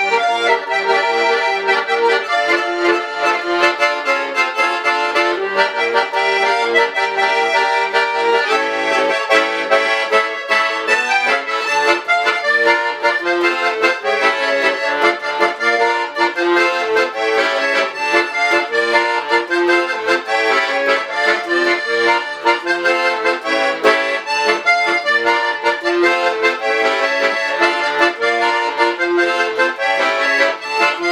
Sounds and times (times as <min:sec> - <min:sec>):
Accordion: 0:00.0 - 0:31.1.